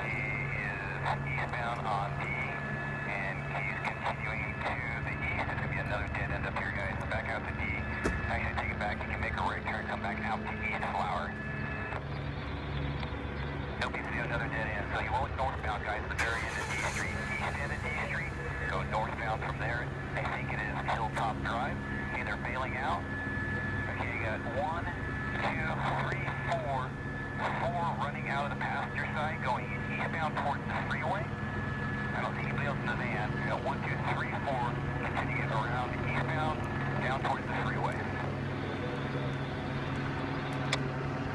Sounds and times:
Speech: 0.0s - 11.4s, 13.8s - 23.0s, 23.9s - 31.3s, 32.1s - 38.2s
Vehicle: 0.0s - 41.3s.

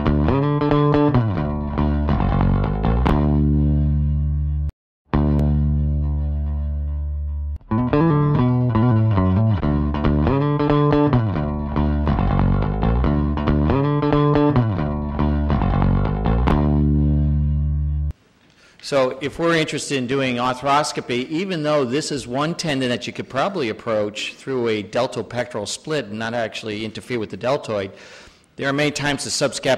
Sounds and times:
Effects unit: 0.0s - 18.2s
Guitar: 0.0s - 18.6s.

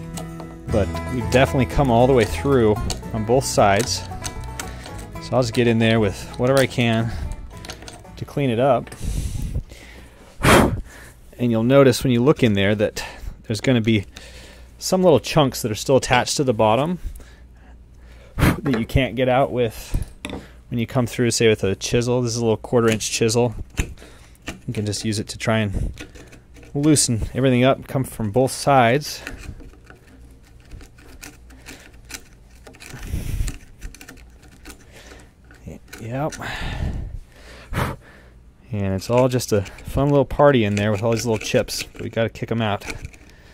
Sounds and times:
Speech: 0.7s - 4.0s, 5.2s - 7.2s, 8.2s - 8.9s, 11.4s - 14.1s, 14.8s - 17.0s, 18.6s - 20.0s, 20.7s - 23.6s, 24.7s - 25.8s, 26.8s - 29.3s, 35.6s - 36.4s, 38.7s - 43.0s.

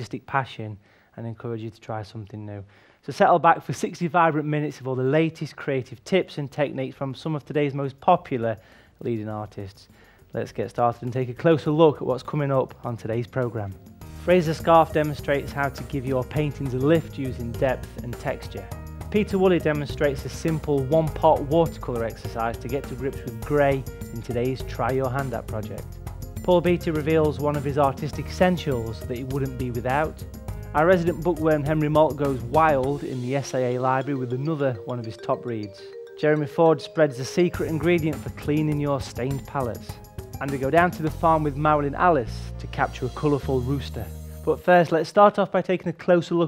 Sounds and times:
Speech: 0.0s - 30.2s, 30.8s - 46.4s
Music: 3.5s - 46.4s.

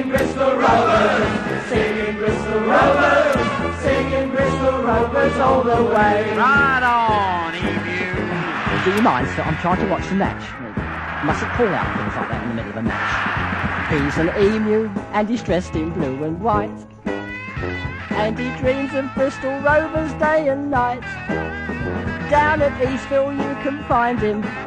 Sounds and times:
Music: 0.0s - 24.6s
Speech: 6.4s - 10.6s, 11.2s - 13.2s, 13.9s - 16.8s, 18.2s - 21.0s, 22.3s - 24.5s.

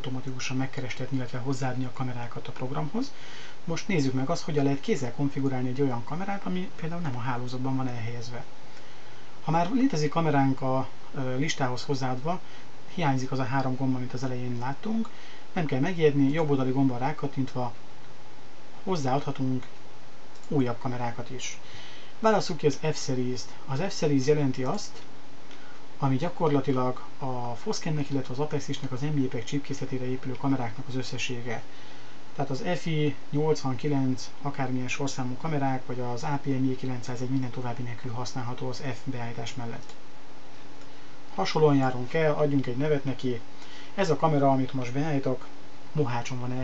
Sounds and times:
Speech: 0.0s - 8.5s, 9.4s - 17.8s, 18.8s - 19.7s, 20.4s - 25.1s, 26.0s - 31.7s, 32.4s - 40.0s, 41.3s - 46.6s.

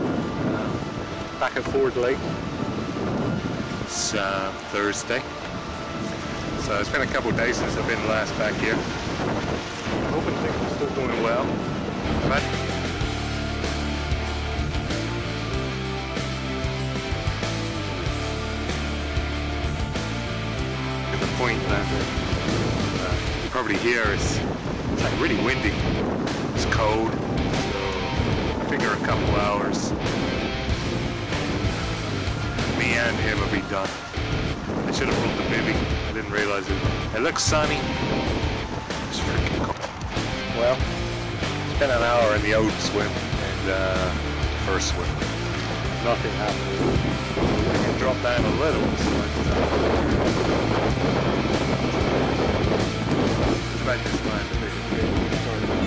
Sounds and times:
Wind noise (microphone): 0.0s - 55.8s.

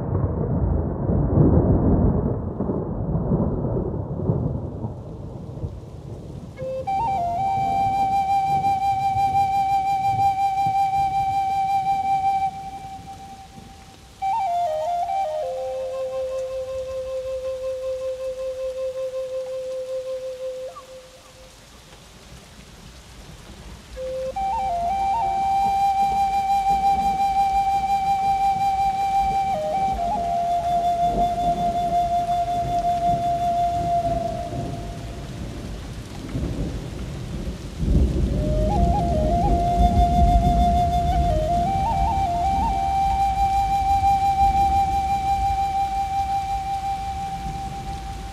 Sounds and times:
Flute: 6.5s - 21.7s, 23.9s - 36.7s, 37.4s - 48.3s.

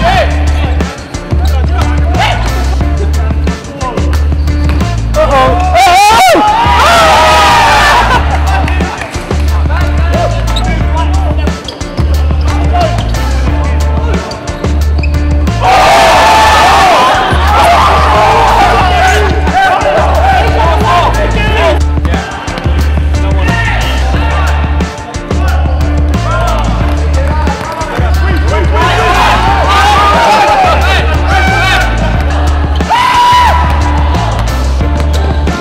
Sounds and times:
Inside, large room or hall: 0.0s - 35.6s
Music: 0.0s - 35.6s.

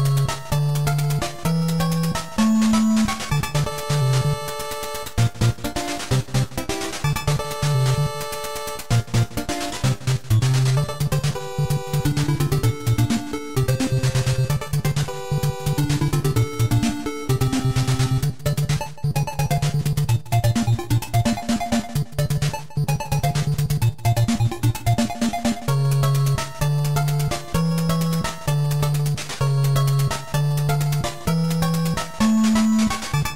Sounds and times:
Music: 0.0s - 33.3s.

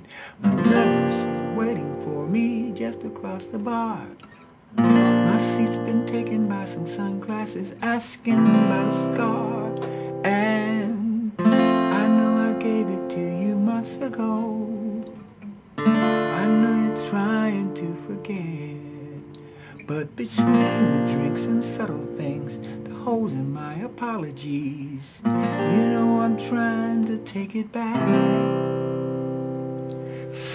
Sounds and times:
Acoustic guitar: 0.0s - 30.5s
Strum: 0.4s - 30.5s.

